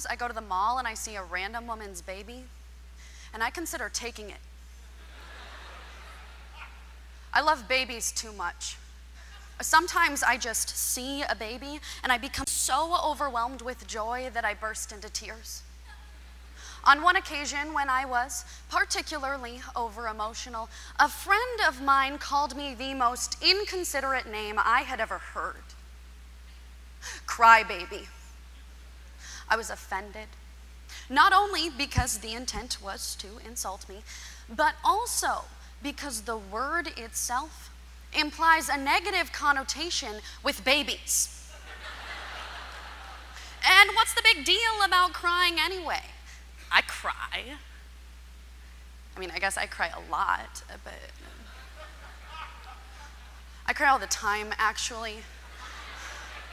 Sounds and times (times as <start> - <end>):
Speech: 0.0 - 2.5, 3.3 - 4.4, 7.3 - 8.8, 9.6 - 15.6, 16.8 - 25.8, 27.3 - 28.2, 29.5 - 30.4, 31.1 - 41.3, 43.6 - 47.7, 49.2 - 51.2, 53.7 - 55.3.